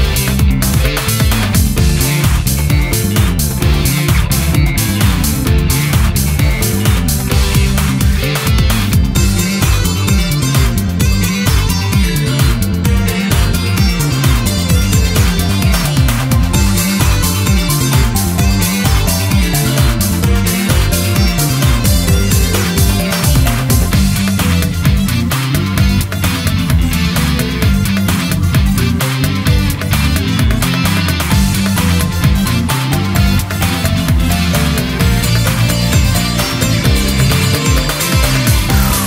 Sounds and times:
Music: 0.0s - 39.0s.

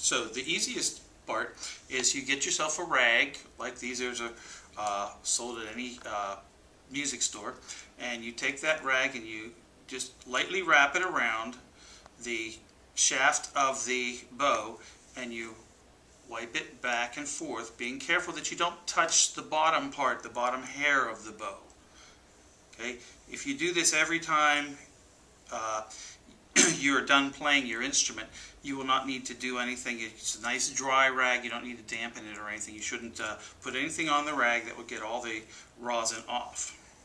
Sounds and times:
Speech: 0.0s - 11.6s, 12.2s - 15.7s, 16.3s - 21.7s, 22.8s - 24.9s, 25.5s - 36.8s.

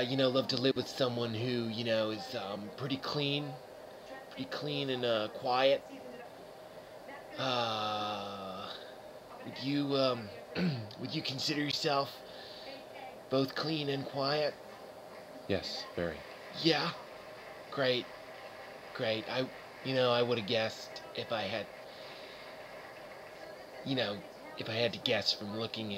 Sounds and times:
Speech: 9.4s - 17.0s, 23.4s - 25.9s.

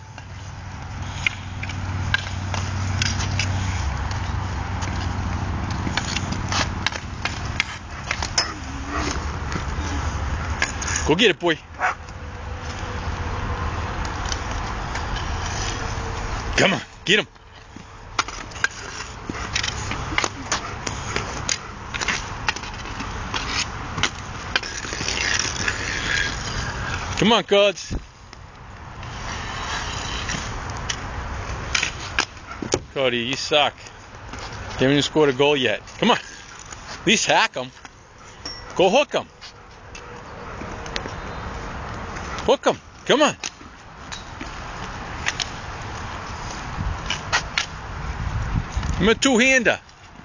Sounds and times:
Speech: 27.2s - 28.0s, 33.0s - 33.8s, 34.8s - 36.2s, 37.1s - 37.8s, 38.8s - 39.3s, 42.5s - 43.4s, 49.0s - 49.8s.

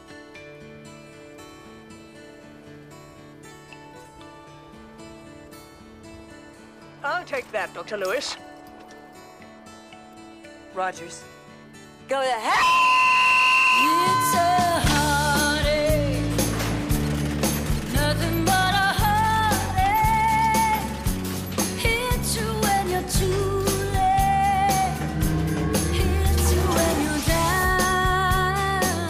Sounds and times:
Pop music: 12.2s - 29.0s.

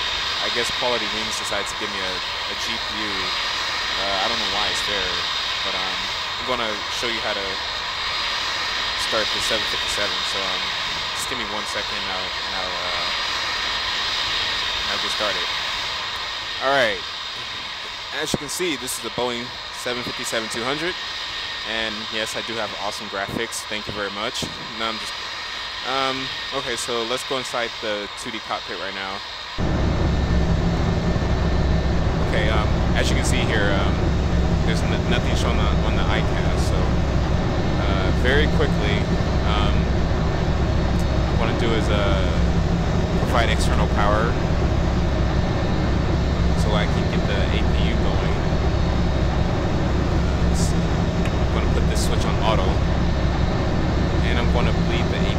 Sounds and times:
Aircraft: 0.0s - 55.3s
Speech: 0.4s - 3.4s, 4.0s - 7.6s, 9.0s - 13.2s, 14.8s - 15.5s, 16.6s - 21.0s, 21.7s - 25.2s, 25.8s - 29.2s, 32.2s - 34.0s, 34.6s - 37.0s, 37.7s - 40.0s, 41.0s - 42.6s, 43.2s - 44.4s, 46.5s - 48.5s, 50.3s - 52.8s, 54.2s - 55.3s.

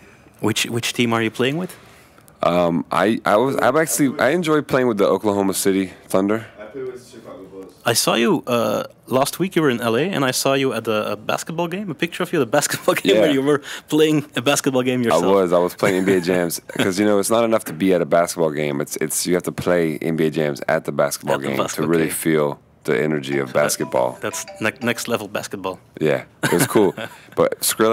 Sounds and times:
Speech: 2.4s - 27.9s.

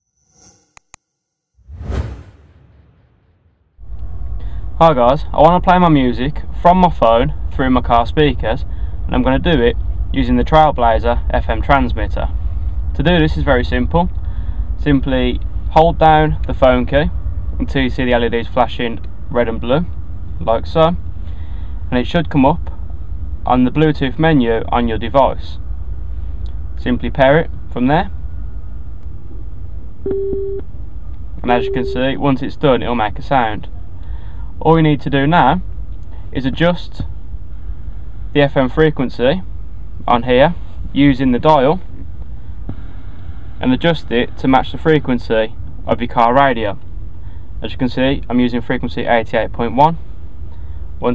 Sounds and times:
Speech: 4.8s - 12.3s, 13.0s - 14.1s, 14.8s - 21.0s, 21.9s - 22.7s, 23.5s - 25.6s, 26.8s - 28.1s, 31.4s - 33.7s, 34.6s - 35.7s, 36.4s - 37.1s, 38.4s - 39.5s, 40.1s - 41.9s, 43.6s - 46.8s, 47.6s - 50.0s.

